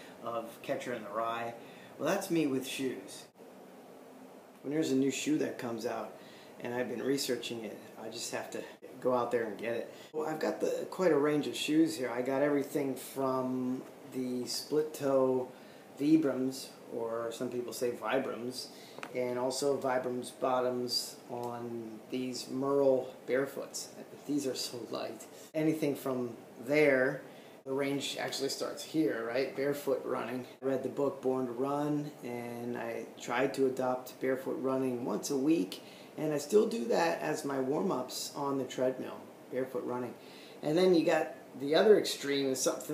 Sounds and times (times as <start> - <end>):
Inside, small room: 0.0 - 42.9
Speech: 0.2 - 3.4, 4.6 - 42.9.